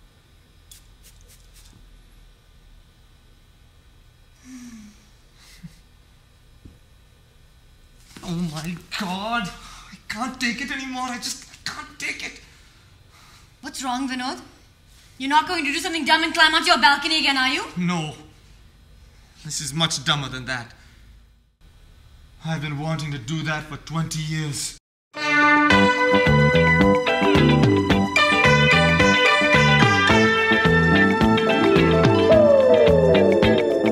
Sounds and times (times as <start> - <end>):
Speech: 8.2 - 12.5, 19.4 - 20.8, 22.4 - 24.8
Music: 25.2 - 33.9.